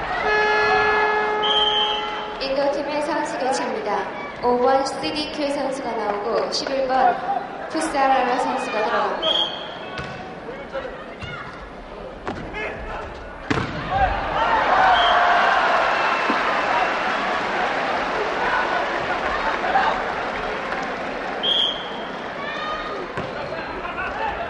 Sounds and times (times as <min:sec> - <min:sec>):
Inside, large room or hall: 0:00.0 - 0:24.5.